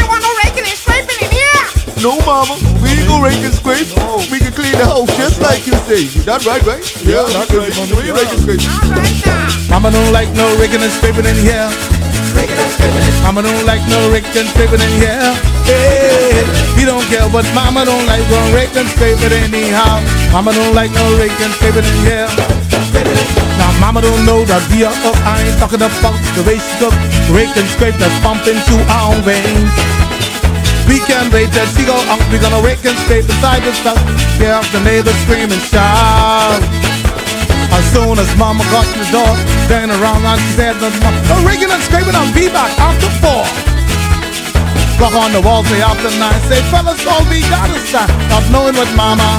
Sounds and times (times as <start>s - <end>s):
Music: 0.0s - 49.3s.